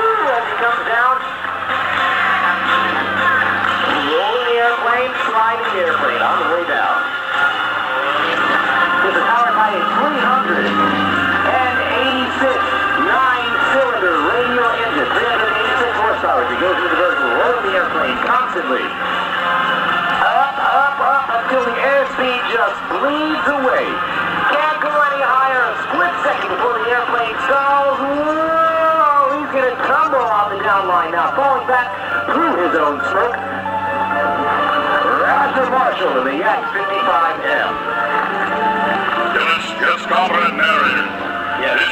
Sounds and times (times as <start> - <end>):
Music: 0.0 - 41.9
Speech: 4.0 - 7.1, 9.0 - 10.9, 11.5 - 18.9, 21.2 - 33.4, 35.1 - 37.8, 39.3 - 41.9.